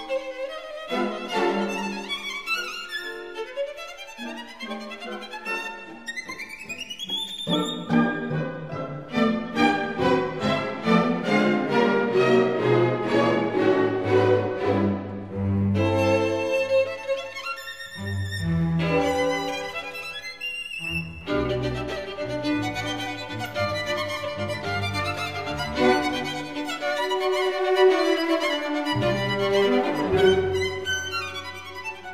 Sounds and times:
Violin, fiddle: 0.0 - 32.1.

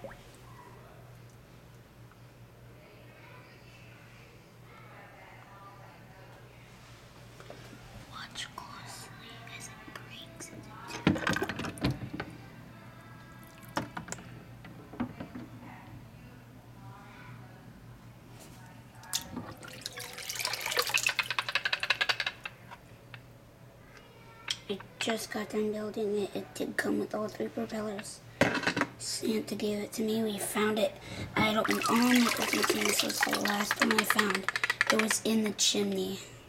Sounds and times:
Water: 0.0 - 0.5, 11.0 - 12.1, 19.0 - 22.0, 31.3 - 35.1.

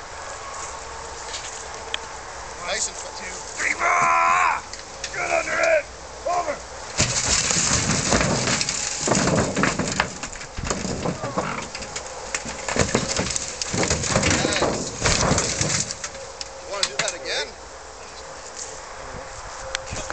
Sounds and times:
Speech: 2.6 - 4.6, 5.2 - 6.6, 14.2 - 14.8, 16.7 - 17.6.

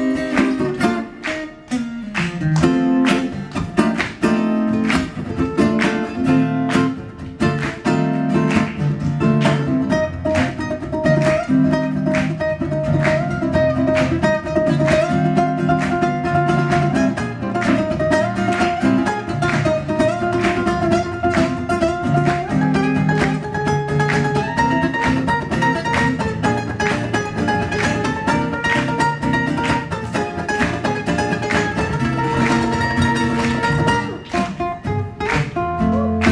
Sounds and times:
Ukulele: 0.0 - 36.3.

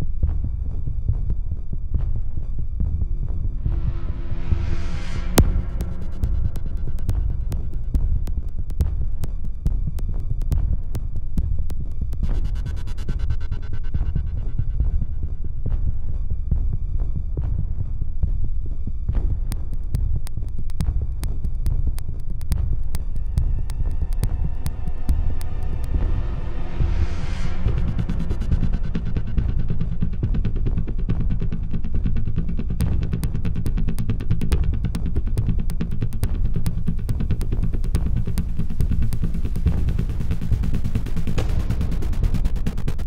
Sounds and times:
Background music: 0.0 - 43.0
Soundtrack music: 3.4 - 9.6, 19.6 - 43.0.

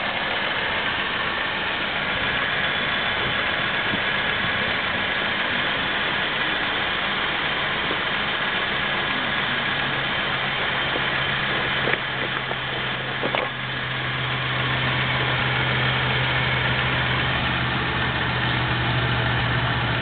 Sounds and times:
Idling: 0.0 - 20.0
Medium engine (mid frequency): 0.0 - 20.0
Vehicle: 0.0 - 20.0.

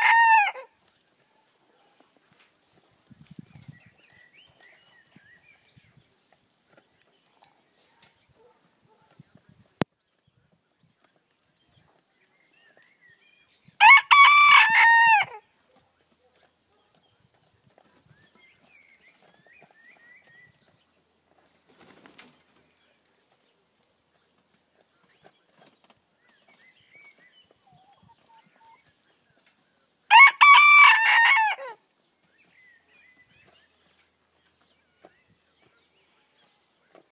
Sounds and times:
Bird: 0.0 - 37.1
Outside, rural or natural: 0.0 - 37.1
Turkey: 25.0 - 29.6.

